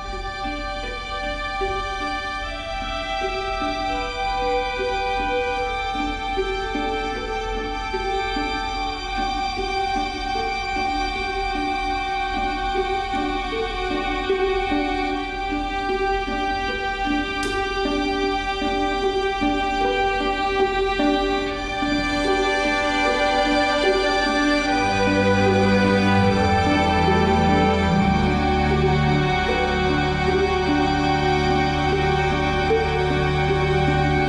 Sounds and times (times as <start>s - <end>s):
Orchestra: 0.0s - 34.2s.